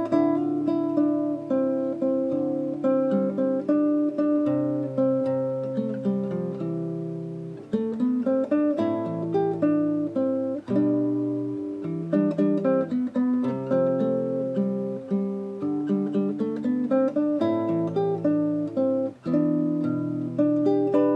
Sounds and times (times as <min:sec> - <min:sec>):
Acoustic guitar: 0:00.0 - 0:21.1
Strum: 0:00.0 - 0:21.1.